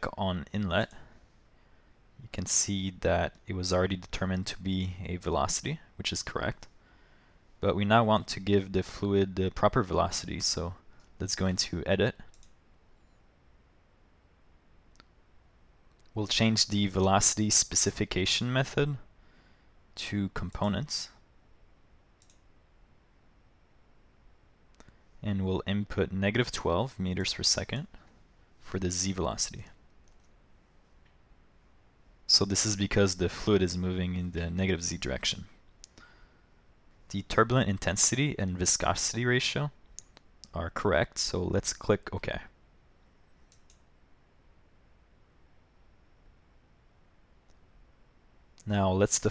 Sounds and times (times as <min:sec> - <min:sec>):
Speech: 0:00.0 - 0:01.1, 0:02.2 - 0:06.7, 0:07.6 - 0:12.3, 0:16.1 - 0:19.1, 0:20.0 - 0:21.2, 0:25.2 - 0:28.0, 0:28.6 - 0:29.8, 0:32.3 - 0:35.6, 0:37.1 - 0:39.8, 0:40.4 - 0:42.6, 0:48.6 - 0:49.3.